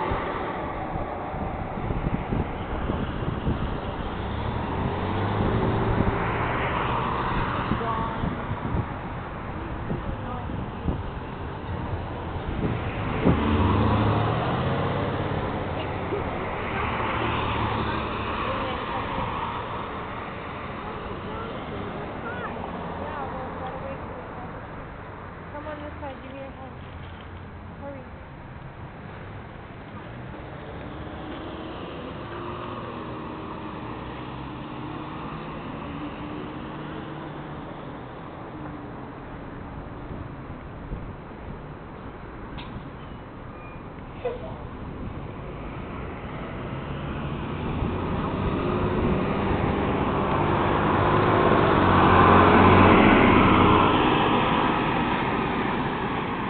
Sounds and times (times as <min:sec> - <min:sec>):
Outside, urban or manmade: 0:00.0 - 0:56.5.